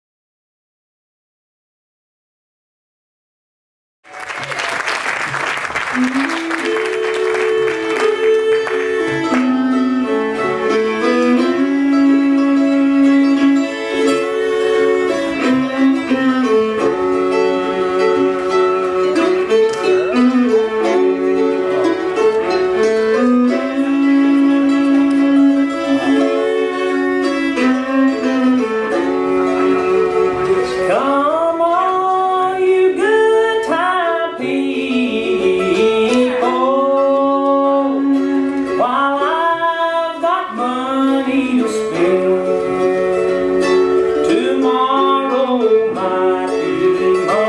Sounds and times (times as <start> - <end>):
Musical instrument: 4.1 - 47.4.